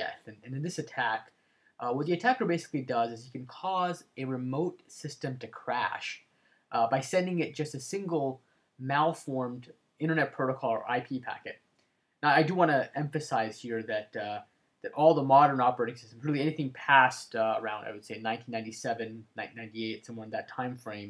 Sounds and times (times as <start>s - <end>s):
Speech: 0.0s - 11.6s, 12.2s - 21.1s.